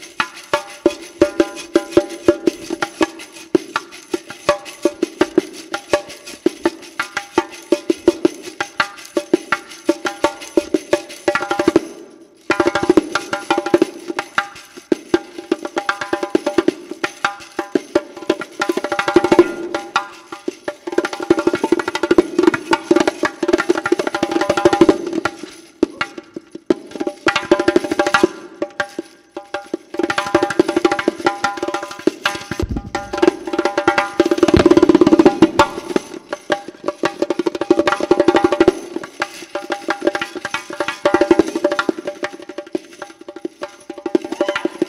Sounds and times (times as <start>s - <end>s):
Wood block: 0.0s - 44.8s.